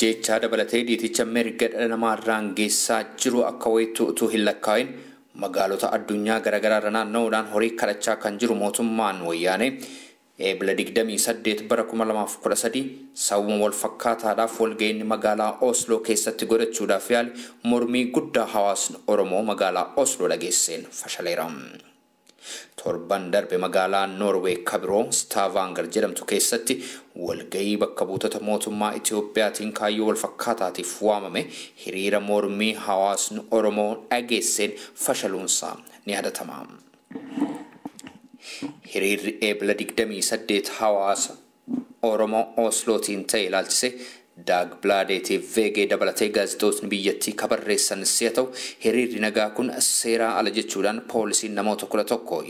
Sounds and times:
Speech: 0.0s - 9.8s, 10.4s - 21.9s, 22.8s - 36.9s, 38.8s - 52.5s.

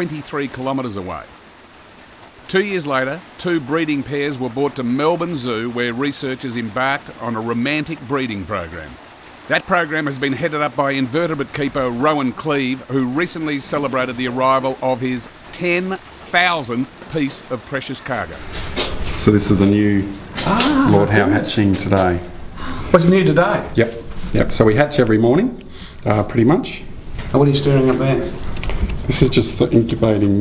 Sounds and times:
Speech: 0.0s - 1.3s, 2.5s - 18.4s, 19.2s - 28.4s, 29.1s - 30.4s.

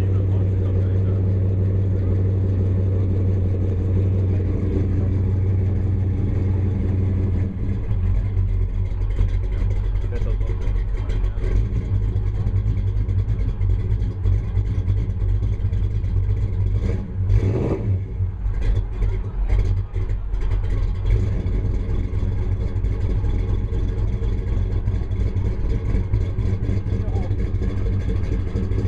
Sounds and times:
Speech: 0.0s - 2.2s, 9.9s - 12.6s, 18.8s - 20.4s, 26.9s - 27.4s
Clatter: 0.0s - 28.8s.

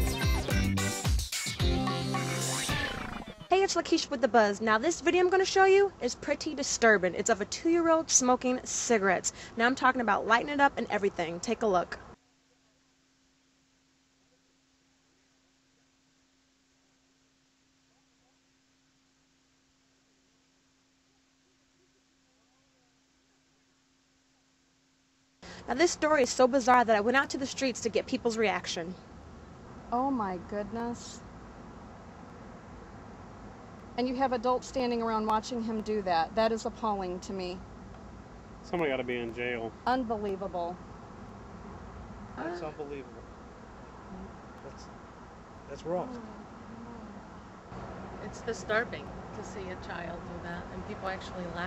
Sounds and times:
Speech: 3.5s - 12.0s, 25.7s - 29.0s, 34.0s - 37.6s, 38.7s - 40.7s, 42.4s - 43.2s, 45.7s - 46.3s, 48.2s - 51.6s.

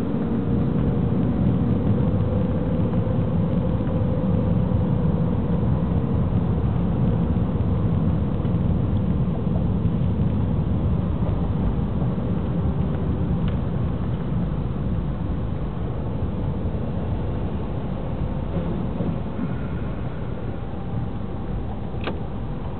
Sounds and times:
Vehicle: 0.0s - 22.7s.

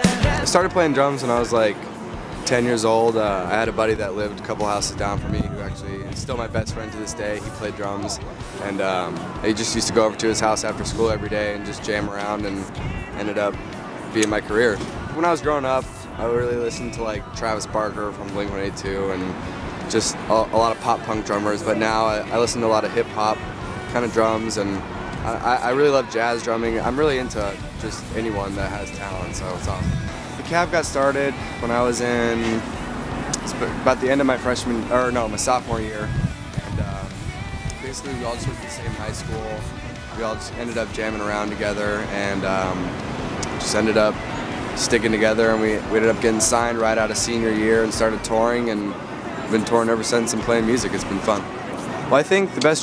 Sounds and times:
Music: 0.0s - 52.8s
Speech: 0.2s - 1.9s, 2.5s - 13.6s, 14.2s - 32.6s, 33.4s - 36.1s, 36.8s - 37.2s, 37.8s - 42.9s, 43.5s - 44.2s, 44.8s - 51.4s, 52.1s - 52.8s.

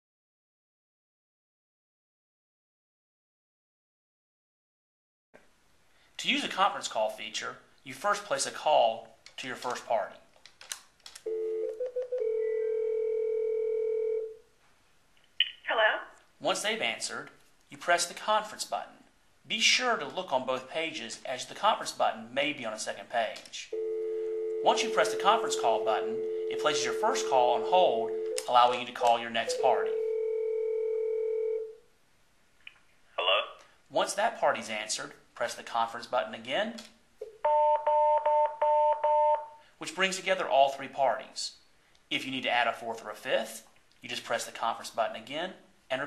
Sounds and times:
Speech: 6.2s - 10.3s, 15.4s - 23.7s, 24.6s - 30.0s, 33.2s - 36.9s, 39.8s - 46.0s
Telephone bell ringing: 11.3s - 14.4s, 23.8s - 28.5s, 29.5s - 31.8s, 37.4s - 39.6s.

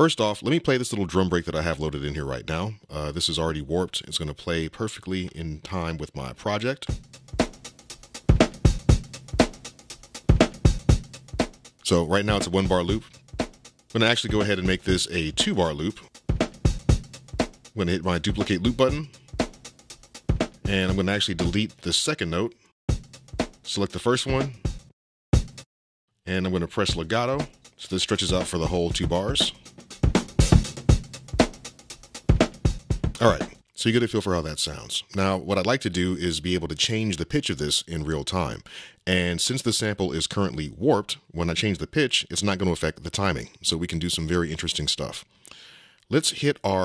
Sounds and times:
Speech: 0.0s - 7.0s, 11.8s - 13.1s, 14.0s - 16.1s, 17.8s - 19.1s, 20.7s - 22.6s, 23.7s - 24.6s, 26.3s - 29.6s, 33.2s - 45.3s, 46.1s - 46.8s.

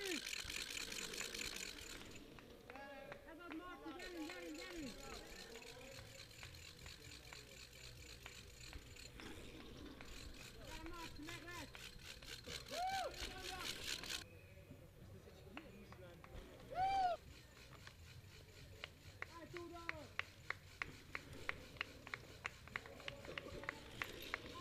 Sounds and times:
Bicycle: 0.0s - 14.3s, 15.6s - 24.6s
Outside, rural or natural: 0.0s - 24.6s
Speech: 19.3s - 20.1s.

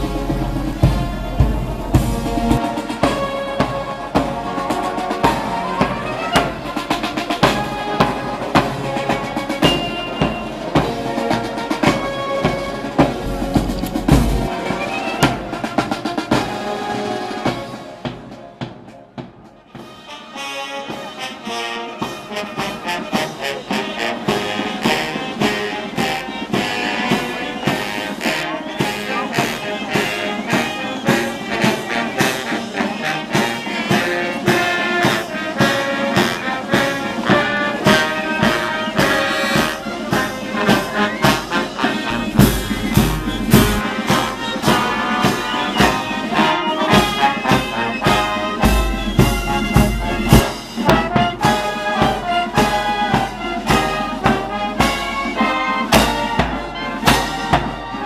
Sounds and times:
Music: 0.0s - 58.0s.

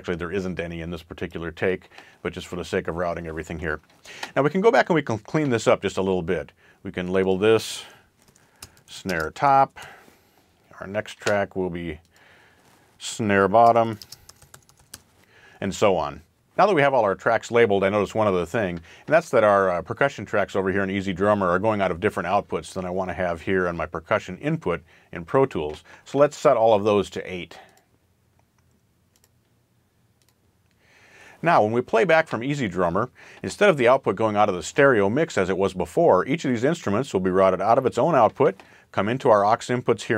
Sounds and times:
Speech: 0.0s - 8.0s, 8.9s - 10.0s, 10.7s - 12.0s, 13.0s - 14.0s, 15.6s - 27.7s, 31.4s - 40.1s
Computer keyboard: 13.9s - 15.0s.

